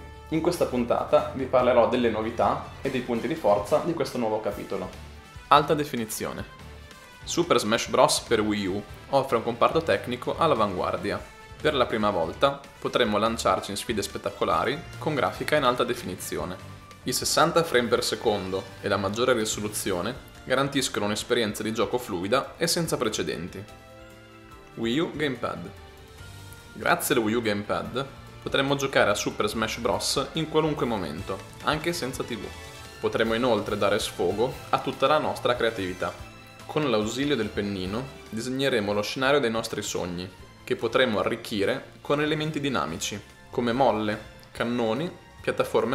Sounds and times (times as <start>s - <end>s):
Music: 0.0s - 45.9s
Speech: 0.3s - 6.5s, 7.3s - 23.7s, 24.8s - 25.8s, 26.8s - 45.9s.